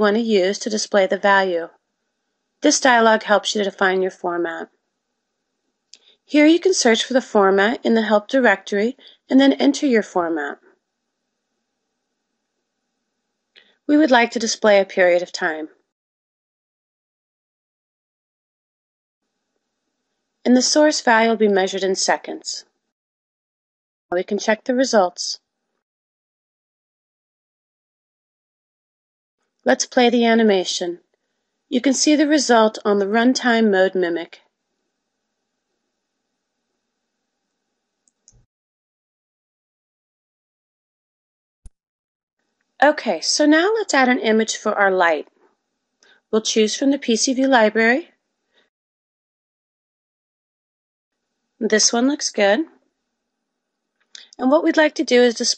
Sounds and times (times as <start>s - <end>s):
Speech: 0.0s - 1.7s, 2.6s - 4.7s, 6.3s - 10.6s, 13.9s - 15.7s, 20.5s - 22.6s, 24.1s - 25.4s, 29.7s - 31.0s, 31.7s - 34.4s, 42.8s - 45.3s, 46.4s - 48.1s, 51.6s - 52.7s, 54.2s - 55.5s.